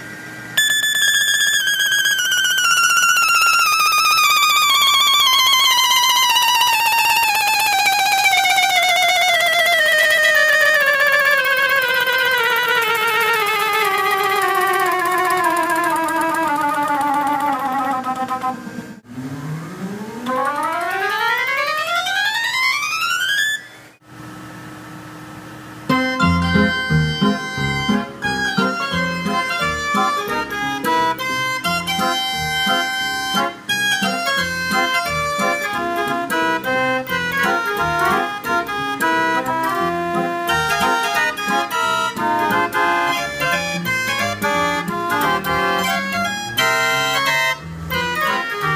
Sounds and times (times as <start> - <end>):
Musical instrument: 0.6 - 18.9, 25.9 - 48.7.